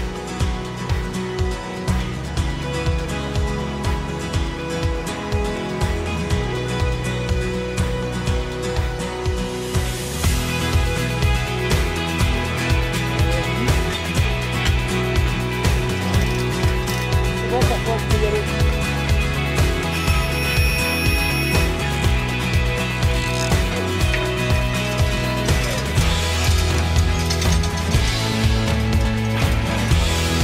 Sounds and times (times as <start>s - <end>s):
Music: 0.0s - 30.4s
Speech: 17.4s - 18.5s.